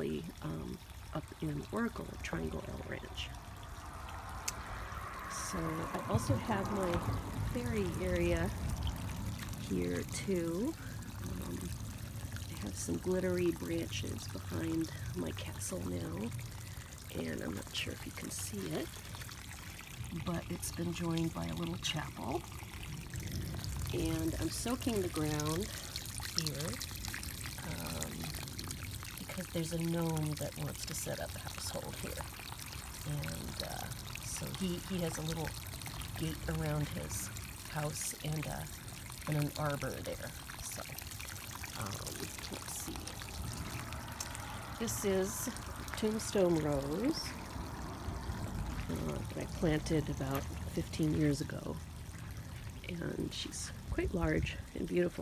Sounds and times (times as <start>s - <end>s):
Speech: 0.0s - 3.3s, 5.3s - 8.6s, 9.6s - 11.7s, 12.5s - 16.3s, 17.1s - 18.9s, 20.2s - 22.4s, 23.9s - 25.8s, 26.4s - 26.8s, 27.6s - 28.3s, 29.2s - 32.2s, 33.1s - 35.5s, 36.2s - 38.7s, 39.3s - 40.9s, 41.8s - 43.2s, 44.8s - 47.4s, 48.9s - 51.8s, 52.9s - 55.2s
Pour: 0.0s - 55.2s.